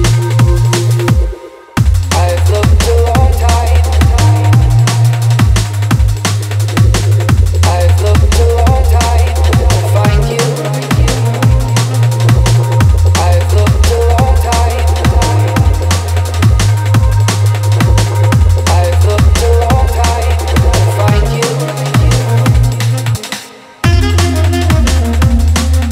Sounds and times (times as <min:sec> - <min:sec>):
Drum and bass: 0:00.0 - 0:25.9.